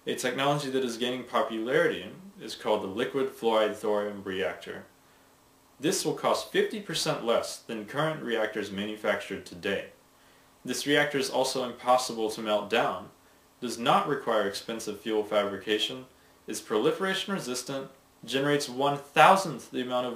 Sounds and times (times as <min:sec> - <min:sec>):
Speech: 0:00.0 - 0:04.9, 0:05.8 - 0:10.0, 0:10.7 - 0:20.1.